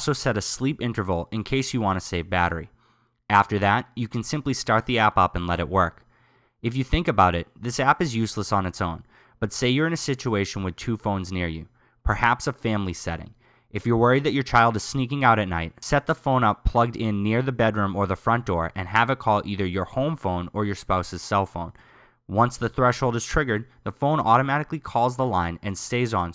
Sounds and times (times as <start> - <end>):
Speech: 0.0 - 2.7, 3.3 - 6.0, 6.6 - 26.3.